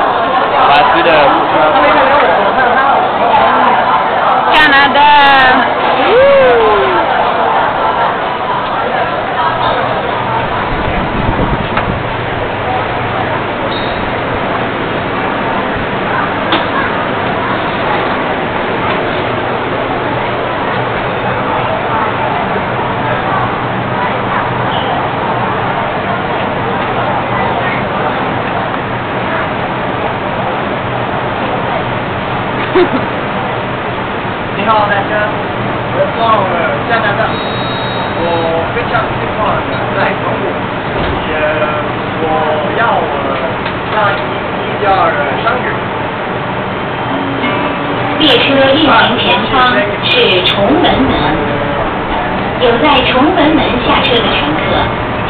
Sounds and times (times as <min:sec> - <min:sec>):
Subway, metro, underground: 0:00.0 - 0:55.2
Train: 0:00.0 - 0:55.2.